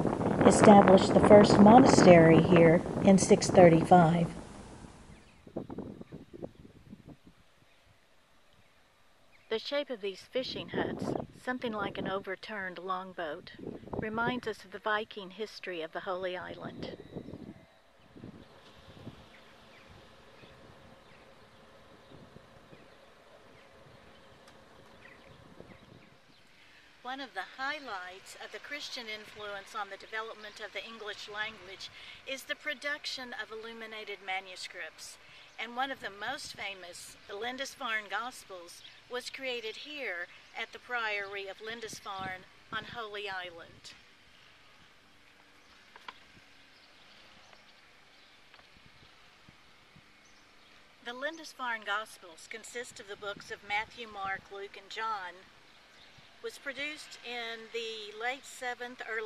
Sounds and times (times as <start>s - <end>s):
Outside, rural or natural: 0.0s - 59.2s
Speech: 0.4s - 4.4s, 9.5s - 17.0s, 27.1s - 44.0s, 51.0s - 55.5s, 56.4s - 59.2s.